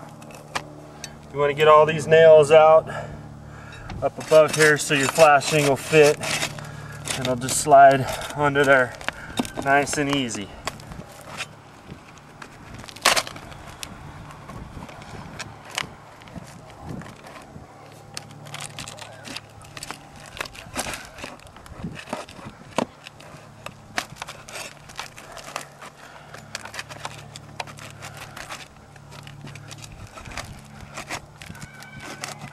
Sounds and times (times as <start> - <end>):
Speech: 4.0 - 6.2, 7.2 - 8.9, 9.6 - 10.6.